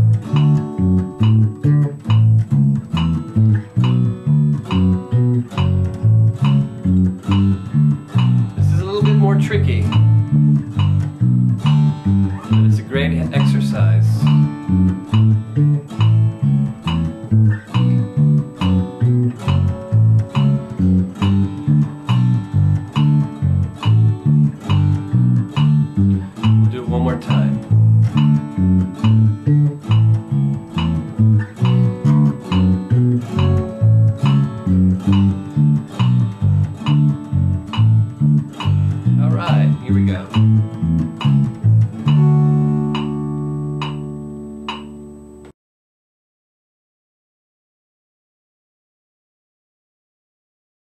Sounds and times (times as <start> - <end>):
Bass guitar: 0.0 - 45.5.